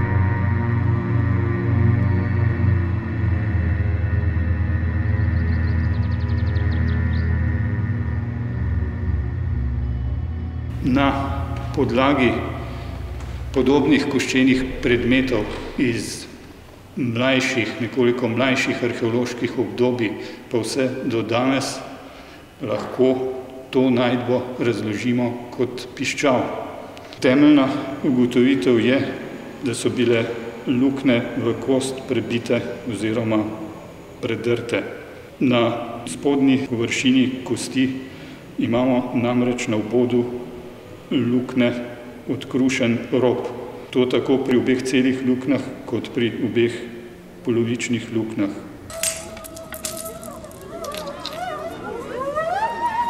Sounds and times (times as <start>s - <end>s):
Speech: 10.8s - 12.7s, 13.6s - 16.4s, 17.0s - 21.9s, 22.6s - 40.4s, 41.1s - 48.7s.